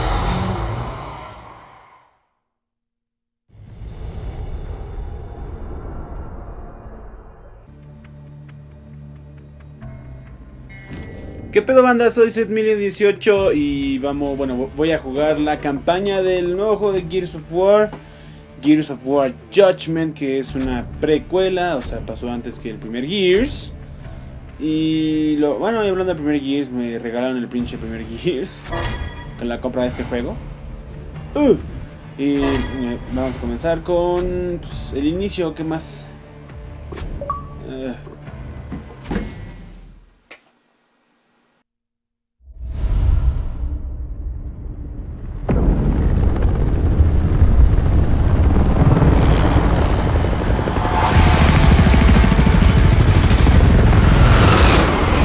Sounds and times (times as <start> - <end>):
Music: 7.5 - 40.1
Speech: 11.6 - 17.9, 18.6 - 23.7, 24.6 - 28.7, 29.4 - 30.4, 31.4 - 31.6, 32.2 - 36.1, 37.6 - 38.0.